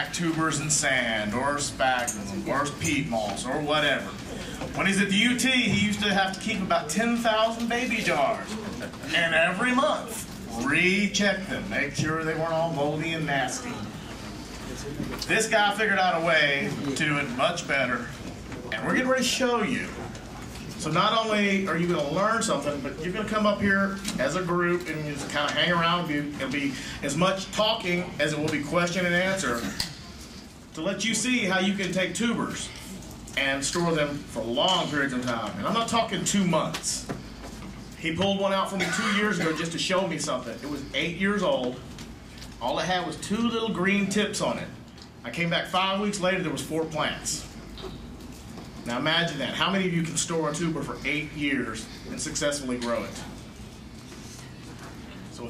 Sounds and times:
Speech: 0.0s - 20.2s, 20.8s - 37.2s, 38.0s - 41.9s, 42.6s - 47.6s, 48.9s - 53.4s, 55.3s - 55.4s.

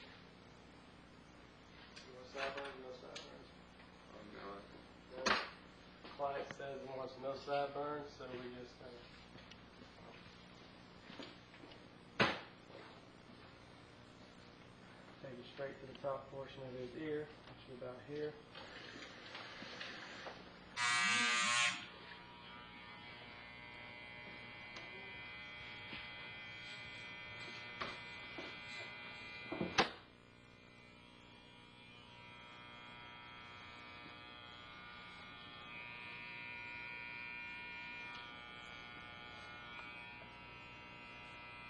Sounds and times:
Speech: 2.0s - 5.4s, 6.1s - 9.1s, 15.2s - 18.5s
Electric shaver, electric razor: 18.6s - 41.6s.

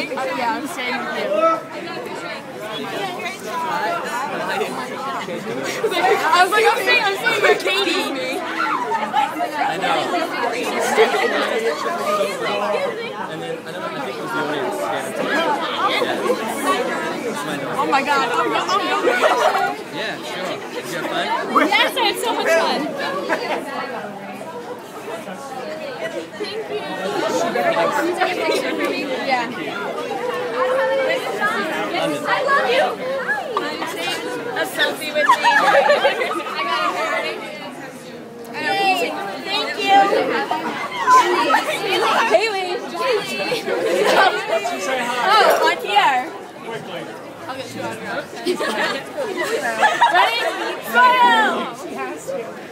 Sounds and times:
Speech: 0.0s - 52.7s.

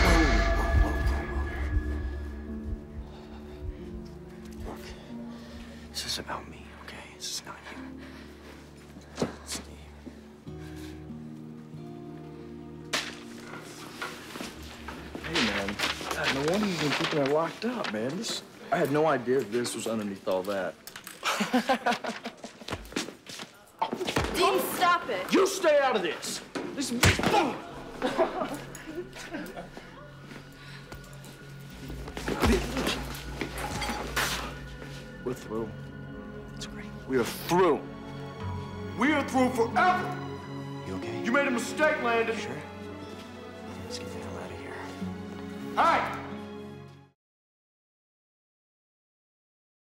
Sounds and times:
Music: 0.0s - 47.2s.

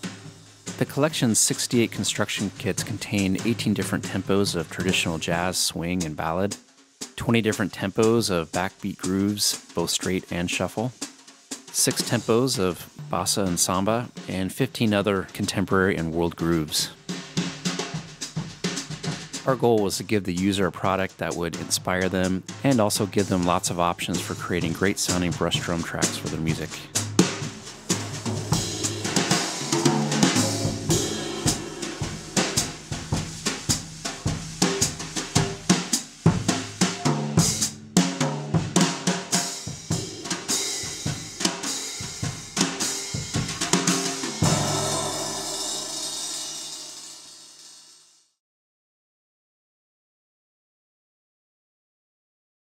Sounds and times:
Bass drum: 0.0s - 6.6s, 21.6s - 47.2s
Snare drum: 0.0s - 47.9s
Drum kit: 0.0s - 48.2s.

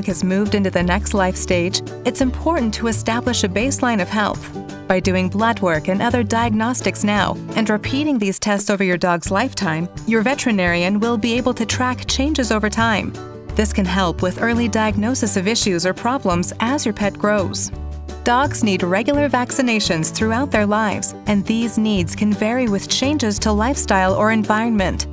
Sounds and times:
Speech: 0.0s - 17.7s, 18.3s - 25.1s
Music: 0.0s - 25.1s.

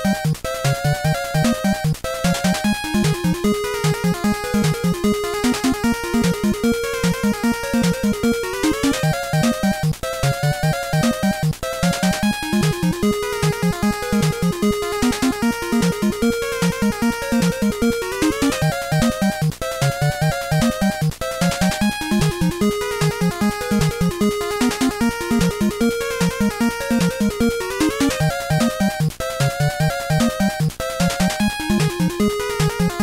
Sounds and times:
Music: 0.0s - 33.0s.

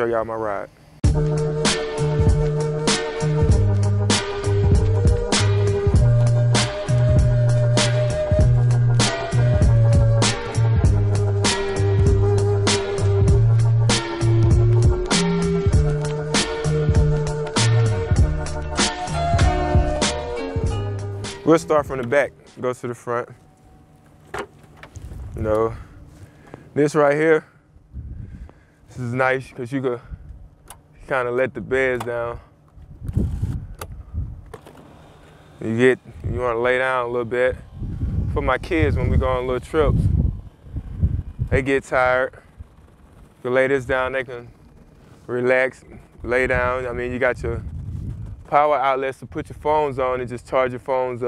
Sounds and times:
Speech: 0.0s - 0.7s, 21.4s - 23.4s, 25.4s - 25.8s, 26.8s - 27.5s, 28.9s - 30.1s, 31.0s - 32.5s, 35.6s - 37.6s, 38.3s - 40.1s, 41.5s - 42.4s, 43.4s - 44.6s, 45.3s - 47.6s, 48.5s - 51.2s.

